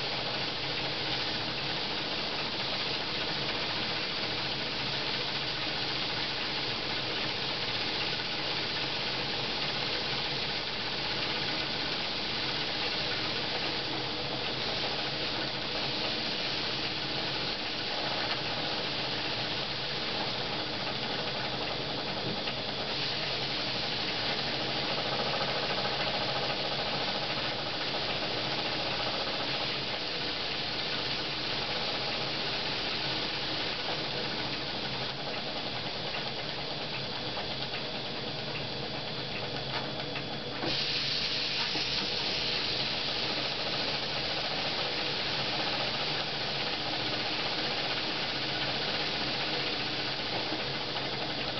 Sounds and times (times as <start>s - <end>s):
Hiss: 0.0s - 51.5s.